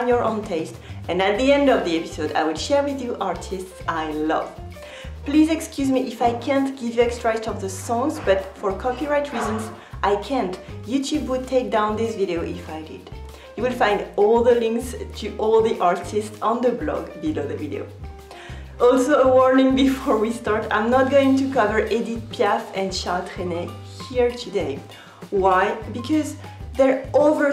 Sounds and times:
Speech: 0.0 - 4.6, 5.2 - 17.9, 18.8 - 27.5
Music: 0.0 - 27.5.

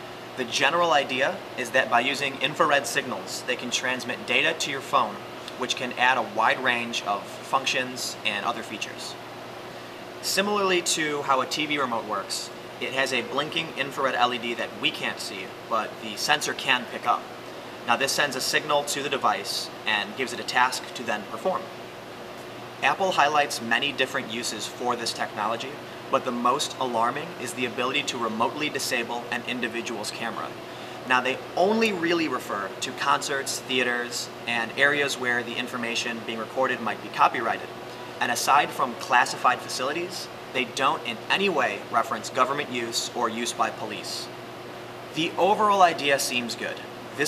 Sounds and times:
Speech: 0.4 - 9.2, 10.2 - 17.3, 17.9 - 21.7, 22.8 - 44.3, 45.2 - 47.2.

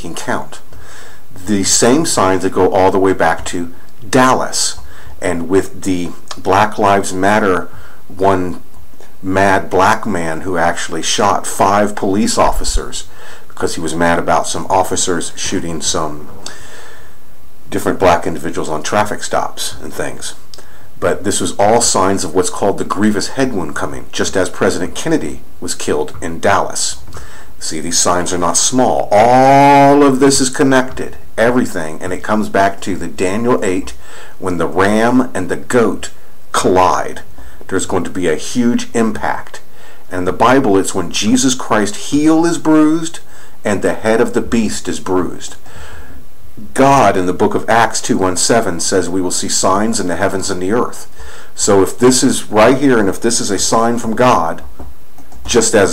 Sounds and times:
Speech: 0.0 - 0.7, 1.4 - 16.6, 17.7 - 45.6, 46.6 - 54.7, 55.4 - 55.9.

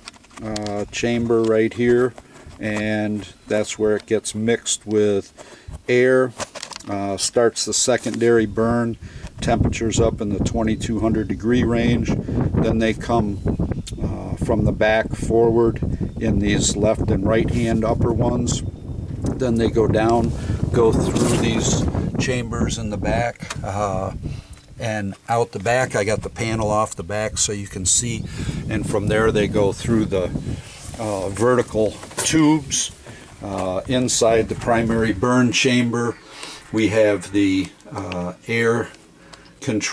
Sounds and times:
Speech: 0.4 - 5.3, 5.9 - 13.4, 14.0 - 18.6, 19.4 - 24.2, 24.8 - 39.0, 39.6 - 39.9.

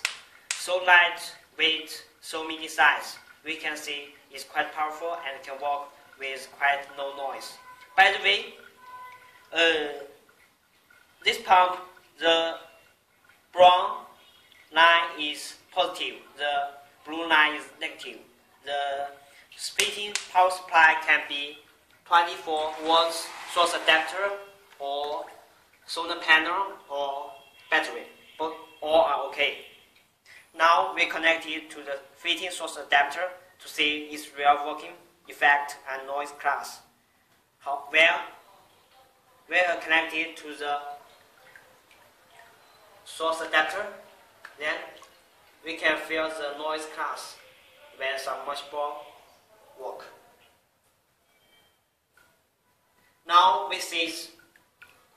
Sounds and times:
Speech: 0.6 - 8.6, 9.5 - 10.2, 11.2 - 12.7, 13.6 - 14.1, 14.7 - 29.6, 30.5 - 36.9, 37.6 - 41.6, 42.3 - 45.0, 45.6 - 50.4, 53.3 - 54.4.

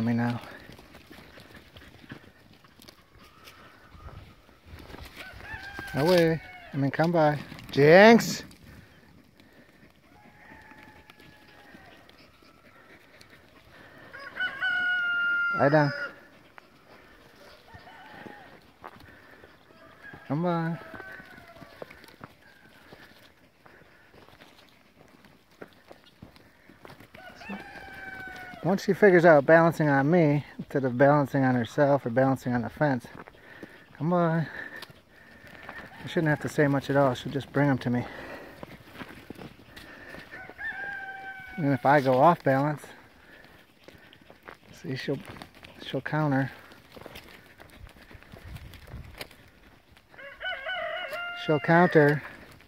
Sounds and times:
Livestock, farm animals, working animals: 0.0 - 52.6
Domestic animals, pets: 0.5 - 6.8, 8.7 - 28.6.

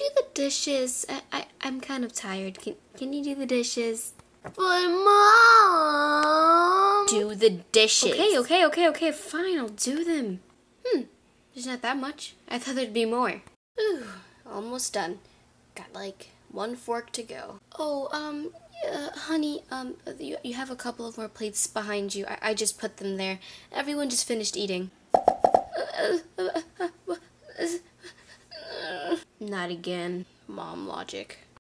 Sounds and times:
Speech: 0.0 - 15.2, 15.8 - 24.9, 29.1 - 31.6.

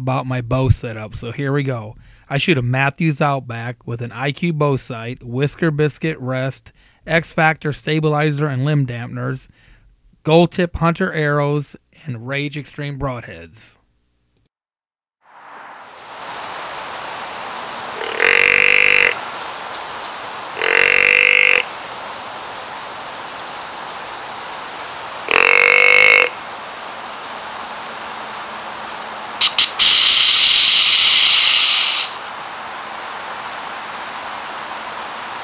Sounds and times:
Animal: 18.0 - 19.2, 20.5 - 21.6, 25.3 - 26.3, 29.4 - 32.2.

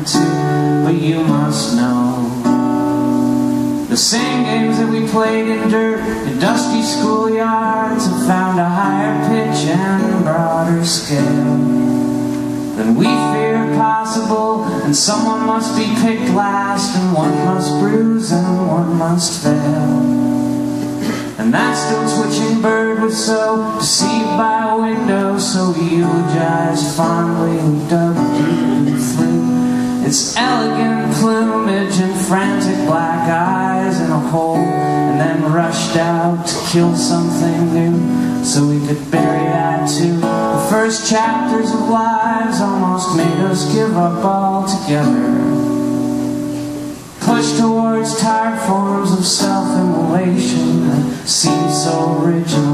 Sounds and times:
Music: 0.0 - 52.7.

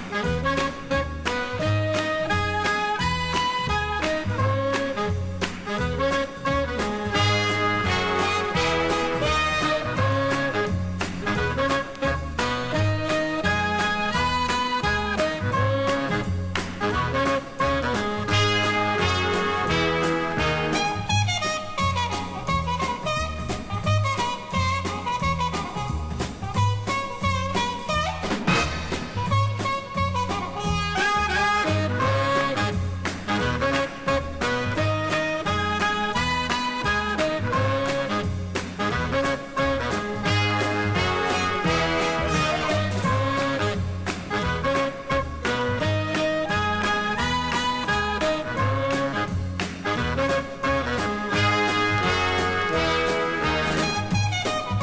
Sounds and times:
Music: 0.0 - 54.8.

